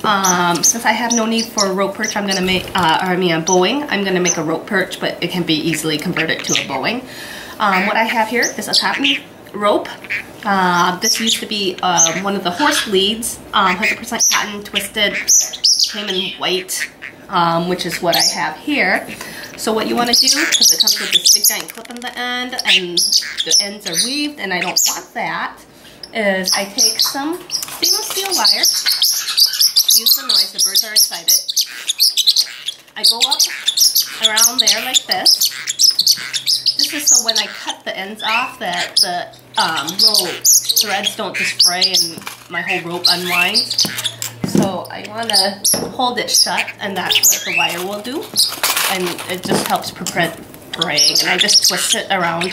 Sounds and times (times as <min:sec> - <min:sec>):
Speech: 0:00.0 - 0:28.8, 0:29.9 - 0:31.5, 0:33.0 - 0:33.5, 0:34.2 - 0:35.4, 0:36.8 - 0:43.8, 0:44.4 - 0:52.5.